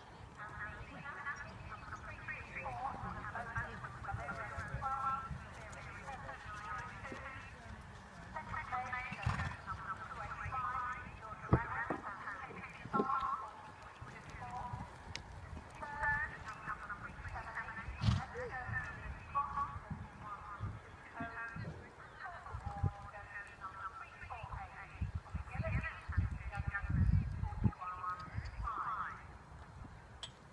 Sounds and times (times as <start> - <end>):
Clip-clop: 0.0 - 30.5
Speech: 0.4 - 14.8, 15.8 - 29.3.